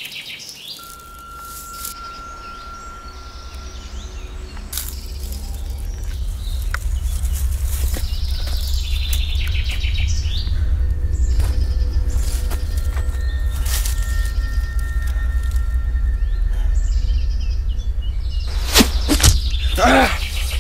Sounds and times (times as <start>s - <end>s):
Music: 0.8s - 20.6s
Arrow: 18.7s - 19.4s.